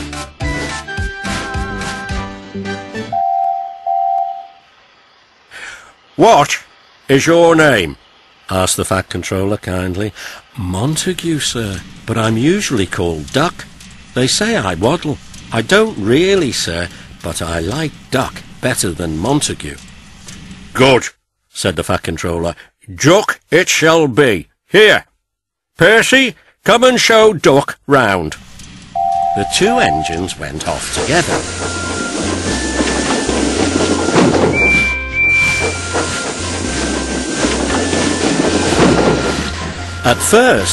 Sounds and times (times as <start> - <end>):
Music: 0.0 - 3.4, 31.5 - 40.7
Railroad car, train wagon: 0.0 - 22.6, 26.0 - 40.7
Speech: 6.2 - 19.8, 20.8 - 25.1, 25.8 - 28.4, 29.4 - 31.4, 40.0 - 40.7.